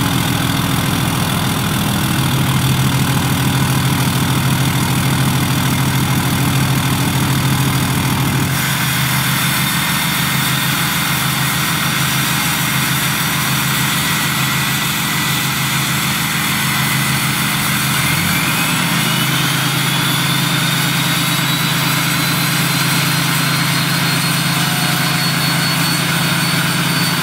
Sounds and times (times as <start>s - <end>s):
Heavy engine (low frequency): 0.0s - 27.2s.